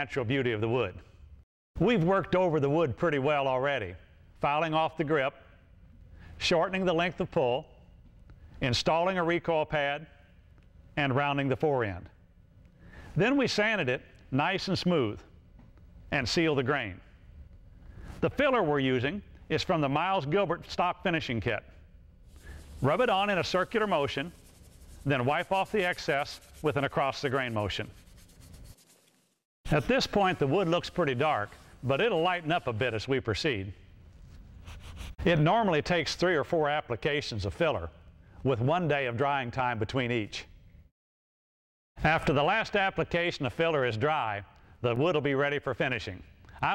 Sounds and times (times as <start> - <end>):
Speech: 0.0 - 1.0, 1.8 - 5.4, 6.4 - 7.8, 8.6 - 10.1, 11.0 - 12.2, 13.2 - 15.3, 16.1 - 17.1, 18.2 - 21.7, 22.8 - 24.4, 25.0 - 28.0, 29.7 - 33.8, 35.2 - 40.5, 42.0 - 46.7.